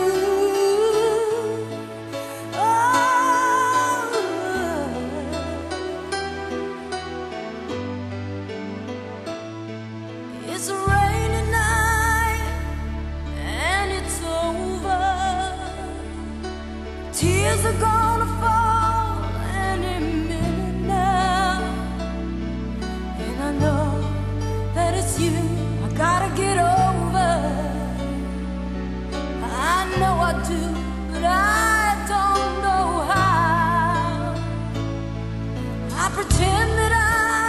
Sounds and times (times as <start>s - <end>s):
Music: 0.0s - 37.4s.